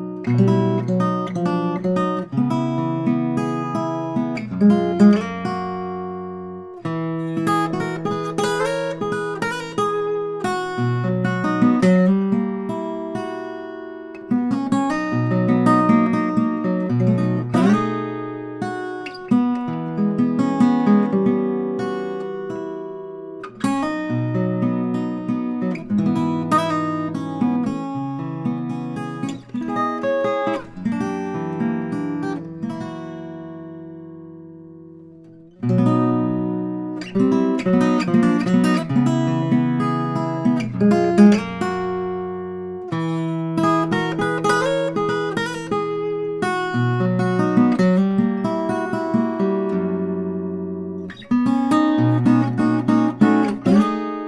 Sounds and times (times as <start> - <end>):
Acoustic guitar: 0.0 - 54.2.